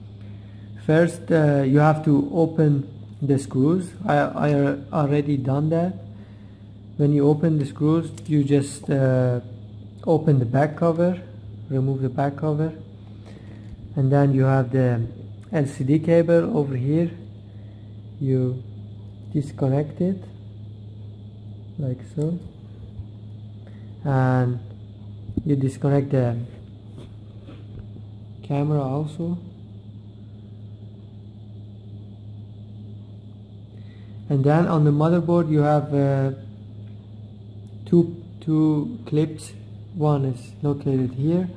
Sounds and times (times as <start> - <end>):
Speech: 0.8 - 6.1, 7.0 - 12.9, 13.9 - 17.3, 18.2 - 18.7, 19.3 - 20.4, 21.8 - 22.6, 24.0 - 24.7, 25.4 - 26.6, 28.4 - 29.6, 34.3 - 36.5, 37.8 - 41.5.